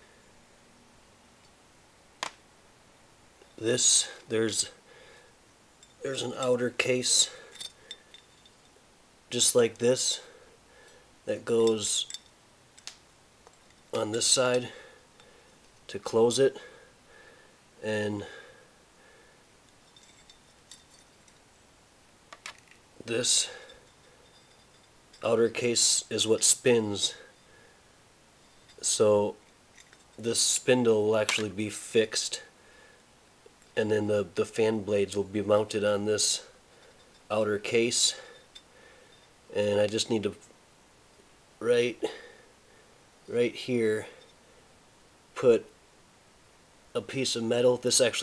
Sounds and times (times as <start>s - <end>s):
Speech: 3.6s - 4.8s, 6.0s - 7.4s, 9.3s - 10.3s, 11.3s - 12.1s, 14.0s - 14.8s, 15.9s - 16.7s, 17.8s - 18.3s, 23.0s - 23.6s, 25.2s - 27.2s, 28.8s - 29.4s, 30.2s - 32.5s, 33.8s - 36.5s, 37.3s - 38.3s, 39.5s - 40.4s, 41.6s - 42.2s, 43.3s - 44.2s, 45.4s - 45.7s, 47.0s - 48.2s.